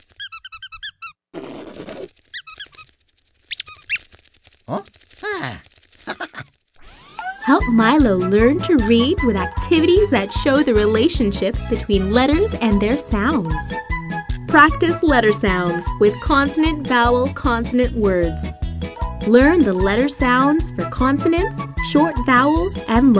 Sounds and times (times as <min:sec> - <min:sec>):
Speech: 0:04.7 - 0:05.6, 0:07.5 - 0:13.8, 0:14.5 - 0:18.5, 0:19.3 - 0:23.1
Music: 0:07.0 - 0:23.1.